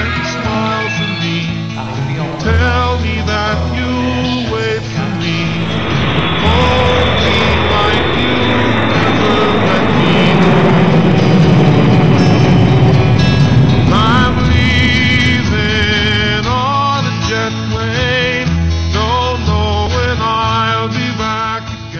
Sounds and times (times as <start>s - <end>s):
Vehicle: 1.8s - 16.6s.